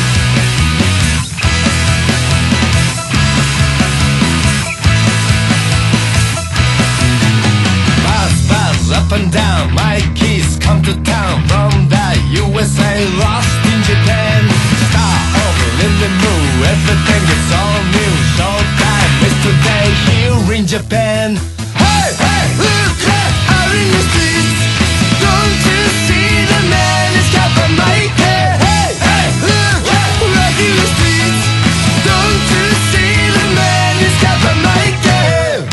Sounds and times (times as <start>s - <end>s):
Music: 0.0s - 35.7s.